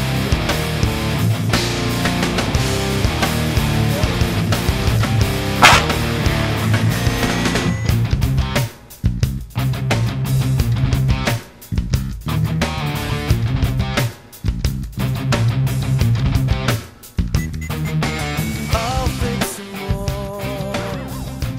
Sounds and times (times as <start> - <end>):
Music: 0.0 - 21.5.